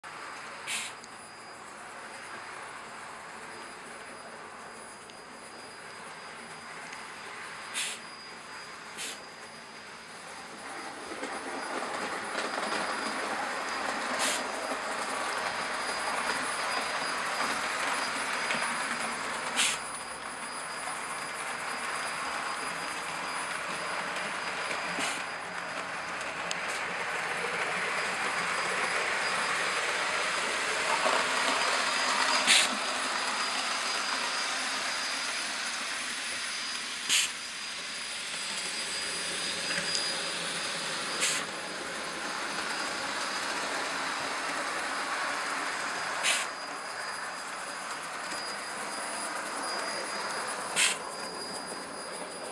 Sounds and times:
Train: 0.0s - 52.5s.

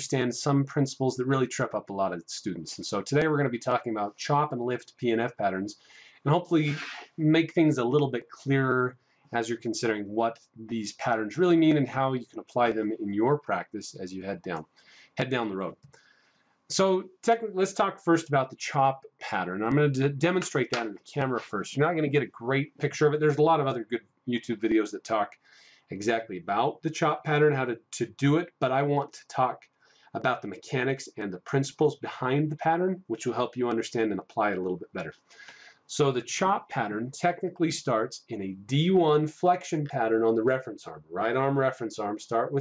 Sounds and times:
Speech: 0.0s - 14.6s, 15.2s - 15.8s, 16.7s - 29.6s, 30.2s - 35.2s, 35.9s - 42.6s.

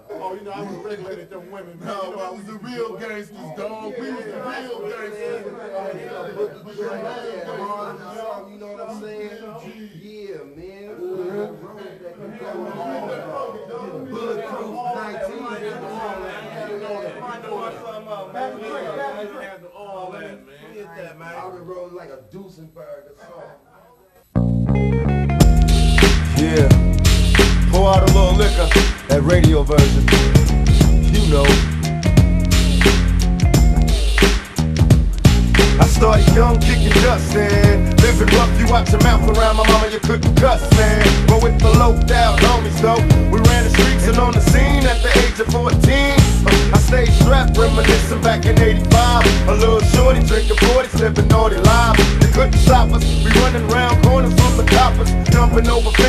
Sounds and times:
Speech: 0.0s - 24.3s, 26.3s - 26.8s, 27.7s - 30.3s, 30.9s - 31.6s, 35.8s - 56.0s
Music: 24.4s - 56.0s.

